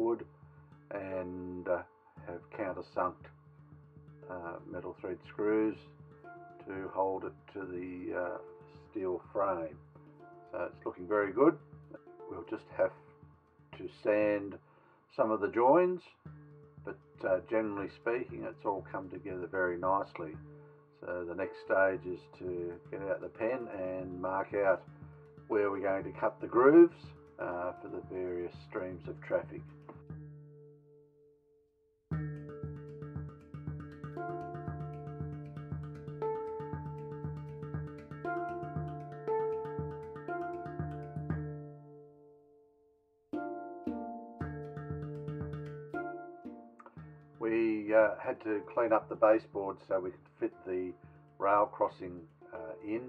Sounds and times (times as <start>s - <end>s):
Speech: 0.0s - 0.2s, 0.9s - 3.3s, 4.3s - 5.9s, 6.6s - 9.8s, 10.6s - 11.6s, 12.3s - 13.0s, 13.8s - 16.2s, 17.2s - 20.4s, 21.0s - 24.8s, 25.5s - 29.6s, 47.4s - 53.0s
Music: 0.0s - 53.0s.